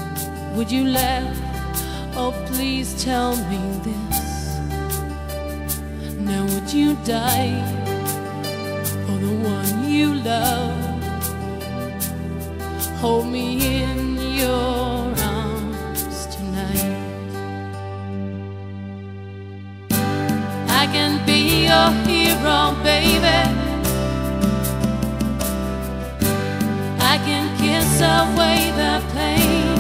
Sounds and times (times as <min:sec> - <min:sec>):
Music: 0:00.0 - 0:29.8.